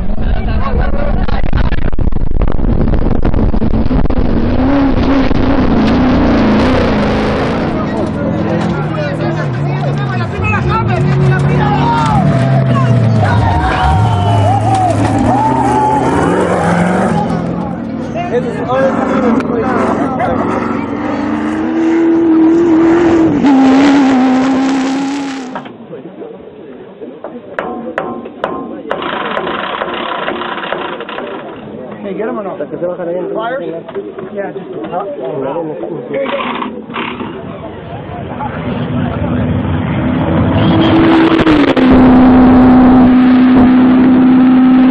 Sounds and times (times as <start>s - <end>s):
Race car, auto racing: 0.0s - 27.6s, 28.7s - 44.9s
Speech: 31.1s - 36.7s.